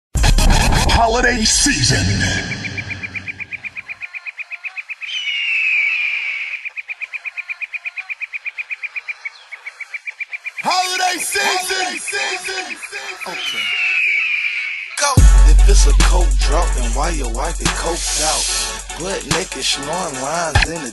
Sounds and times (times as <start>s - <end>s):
Music: 0.2s - 1.4s, 15.1s - 20.9s
Bird vocalization, bird call, bird song: 2.4s - 10.9s, 11.6s - 15.1s.